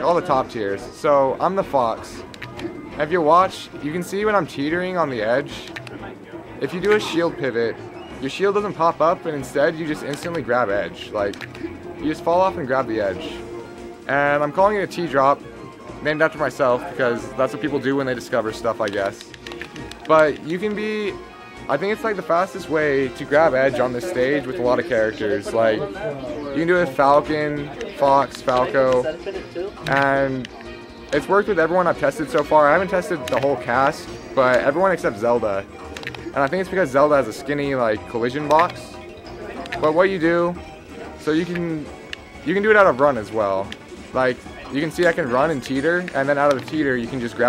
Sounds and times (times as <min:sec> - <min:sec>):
Speech: 0:00.0 - 0:02.2, 0:03.0 - 0:11.4, 0:12.0 - 0:13.4, 0:14.1 - 0:15.4, 0:16.0 - 0:19.2, 0:20.1 - 0:30.5, 0:31.1 - 0:35.6, 0:36.4 - 0:38.9, 0:41.2 - 0:41.9, 0:42.5 - 0:47.4
Music: 0:00.0 - 0:47.4.